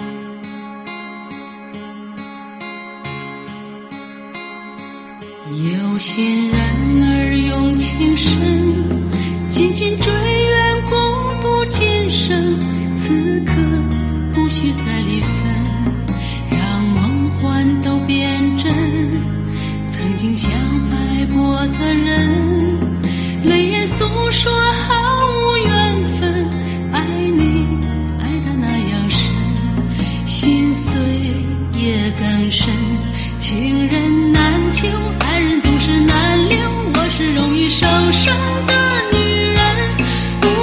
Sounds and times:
Music: 0.0 - 40.6.

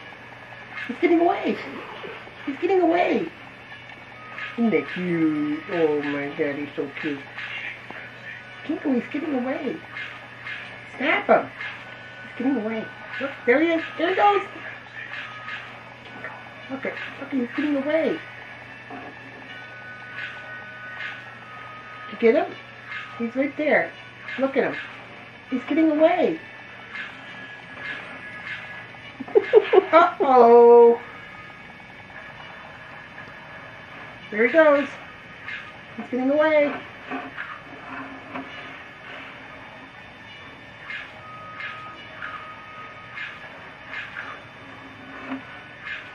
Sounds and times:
Speech: 0.9 - 1.8, 2.5 - 3.4, 4.6 - 7.3, 8.7 - 9.8, 11.0 - 11.5, 12.4 - 14.6, 16.7 - 18.2, 25.5 - 26.4, 29.9 - 31.0, 34.3 - 35.0, 36.0 - 36.8.

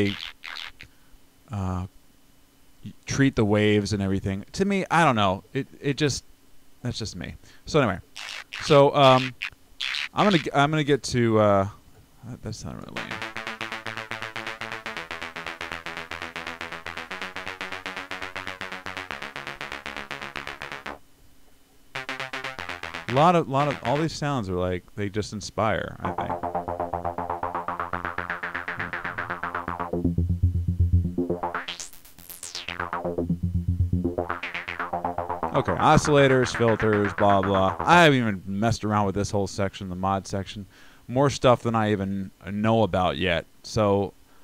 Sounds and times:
Speech: 1.5 - 1.9, 2.8 - 6.2, 6.8 - 8.0, 8.6 - 9.3, 10.2 - 13.2, 23.1 - 26.4, 35.6 - 44.2
Music: 13.0 - 21.0, 22.0 - 24.1, 26.0 - 38.2.

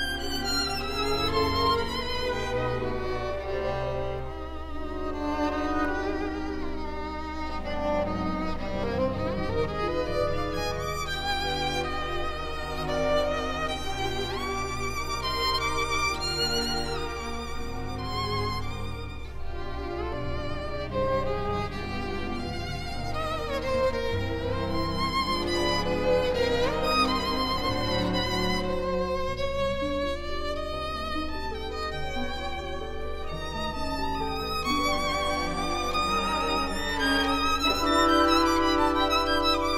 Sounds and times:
Violin, fiddle: 0.0 - 39.7.

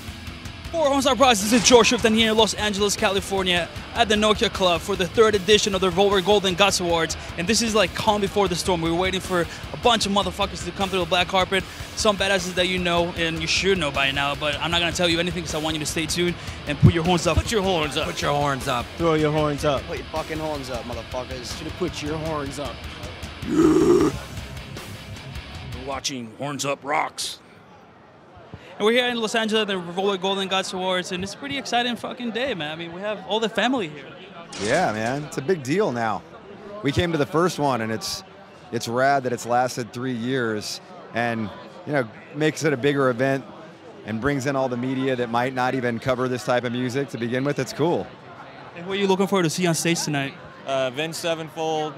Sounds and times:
Speech: 0.8 - 22.8, 28.8 - 38.2, 38.8 - 48.1, 48.7 - 51.9.

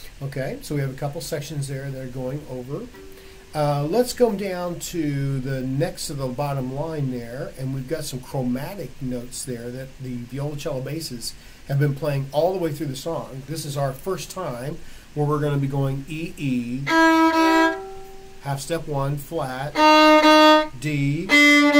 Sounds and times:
Speech: 0.0 - 17.0, 18.4 - 19.8, 20.7 - 21.5.

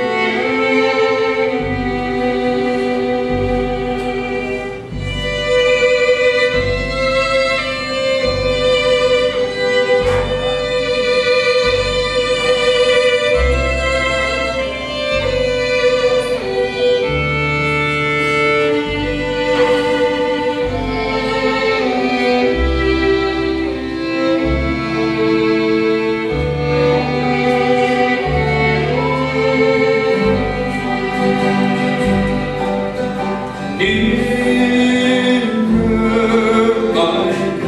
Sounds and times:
Bluegrass: 0.0 - 37.6.

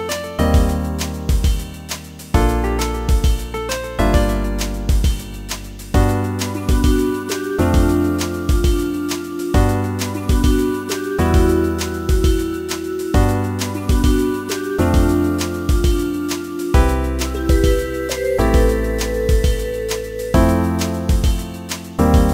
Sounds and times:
Jazz: 0.0 - 22.3.

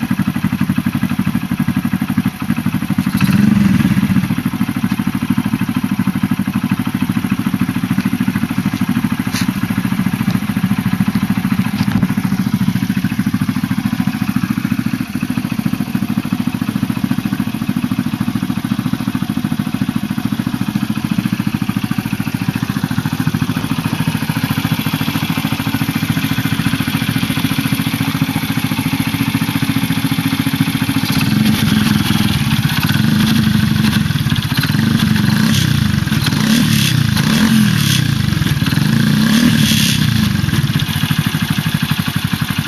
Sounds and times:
Medium engine (mid frequency): 0.0 - 42.6
Vehicle: 0.0 - 42.6.

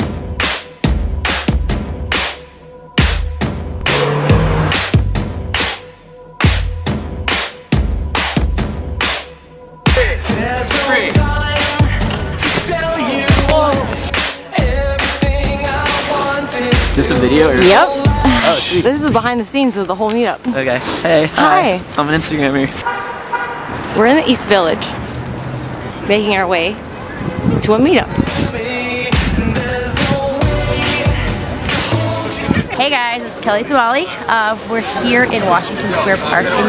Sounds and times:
Music: 0.0 - 19.2, 27.9 - 32.8.

